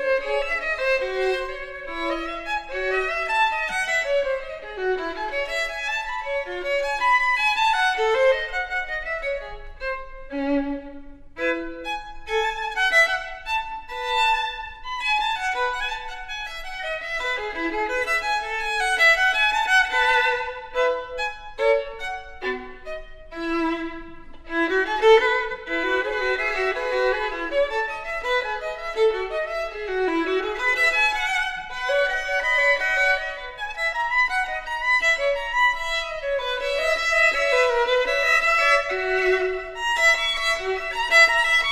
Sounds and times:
Violin, fiddle: 0.0s - 41.7s.

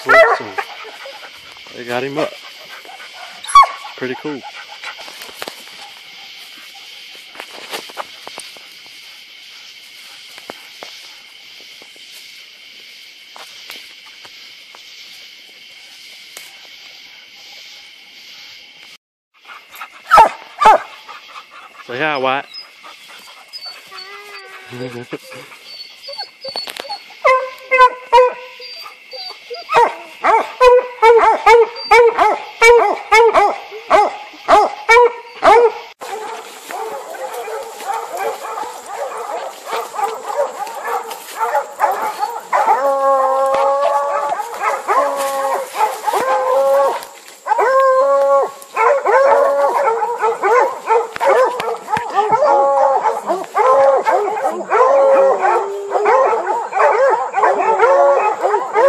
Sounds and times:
Outside, rural or natural: 0.0s - 58.8s
Howl: 23.5s - 58.8s.

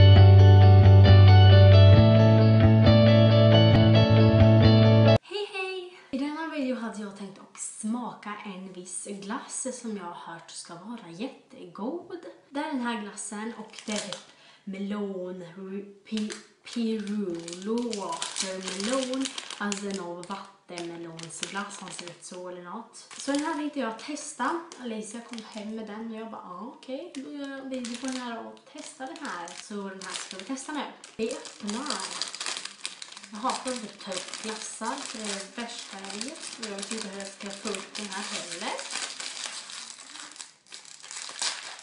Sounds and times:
Speech: 5.2s - 32.3s, 33.3s - 38.9s.

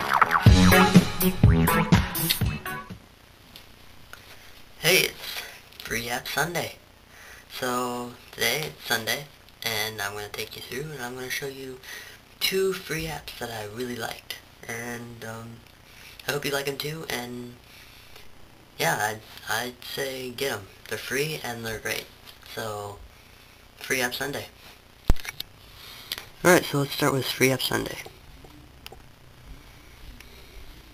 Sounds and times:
Speech: 4.8s - 6.8s, 7.5s - 11.8s, 12.4s - 15.6s, 16.2s - 17.6s, 18.8s - 23.0s, 23.8s - 24.6s, 26.4s - 28.2s.

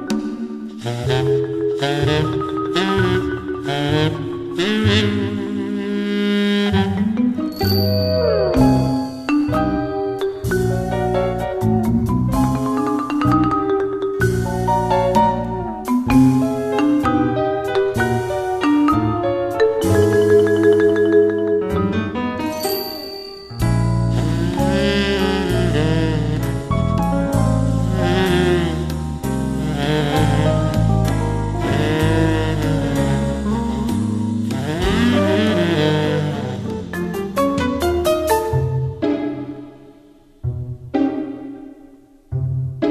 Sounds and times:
Music: 0.0s - 42.9s.

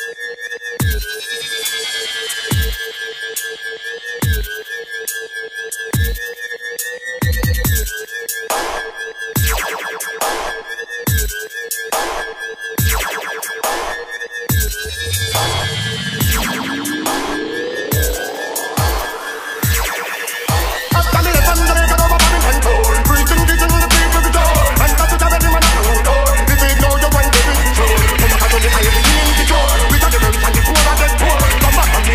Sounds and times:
Dubstep: 0.0s - 32.1s
Hip hop music: 0.0s - 32.1s
Reggae: 14.8s - 32.1s.

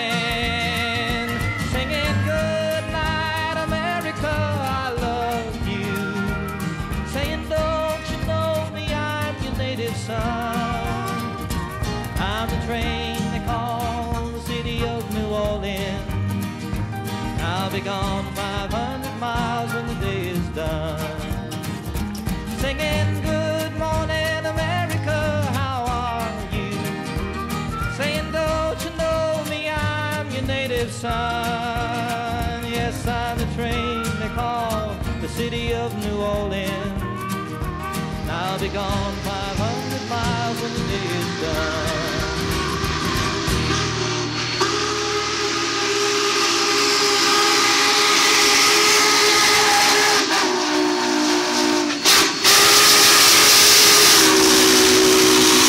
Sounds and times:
Steam whistle: 0.0s - 9.4s, 10.4s - 13.2s, 38.3s - 55.6s
Hiss: 38.6s - 55.6s.

